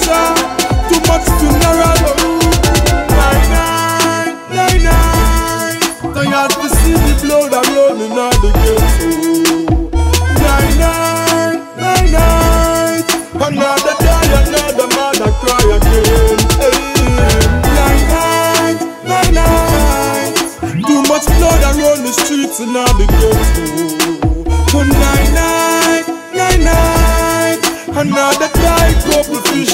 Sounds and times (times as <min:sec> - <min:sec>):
Music: 0:00.0 - 0:29.7.